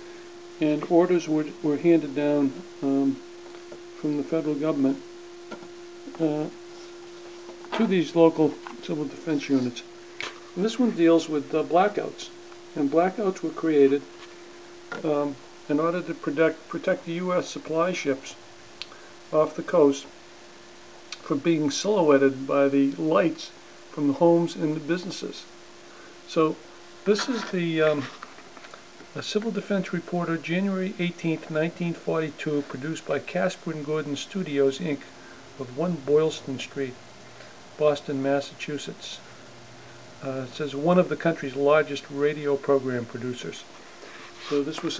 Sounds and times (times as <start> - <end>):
Speech: 0.6 - 3.2, 4.0 - 5.0, 6.0 - 6.6, 7.7 - 9.9, 10.6 - 14.1, 14.9 - 18.4, 19.3 - 20.1, 21.2 - 25.5, 26.3 - 28.2, 29.1 - 37.0, 37.8 - 39.3, 40.2 - 43.7, 44.4 - 44.9.